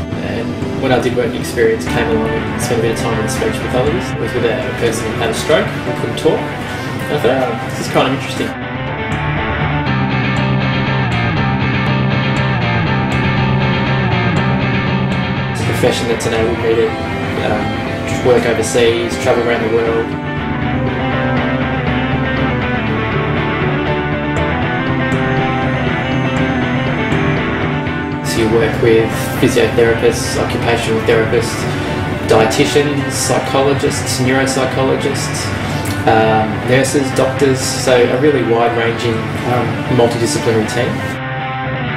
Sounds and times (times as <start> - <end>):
Music: 0.0 - 41.9
Male speech, man speaking: 0.1 - 8.6, 15.6 - 20.1, 28.3 - 41.2.